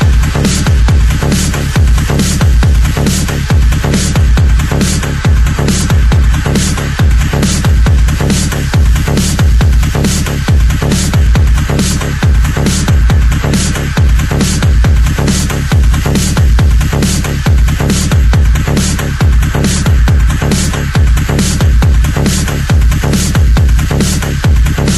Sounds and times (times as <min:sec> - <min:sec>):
Electronic music: 0:00.0 - 0:24.9.